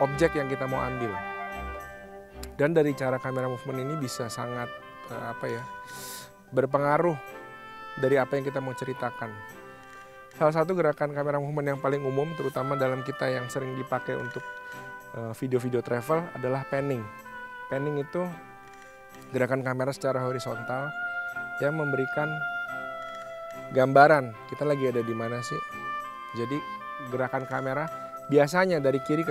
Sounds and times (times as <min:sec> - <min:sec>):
Speech: 0:00.0 - 0:01.2, 0:02.6 - 0:05.7, 0:06.6 - 0:07.2, 0:08.0 - 0:09.4, 0:10.4 - 0:14.4, 0:15.2 - 0:17.1, 0:17.7 - 0:18.4, 0:19.3 - 0:20.9, 0:21.6 - 0:22.4, 0:23.7 - 0:25.6, 0:26.4 - 0:29.3
Music: 0:00.0 - 0:29.3.